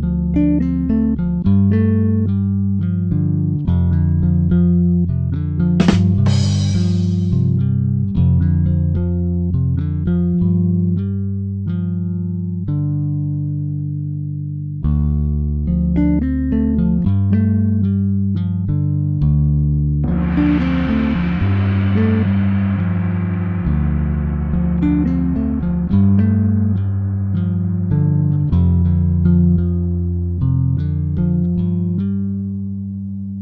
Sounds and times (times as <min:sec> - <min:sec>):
Gong: 0:05.8 - 0:07.5, 0:20.1 - 0:30.5.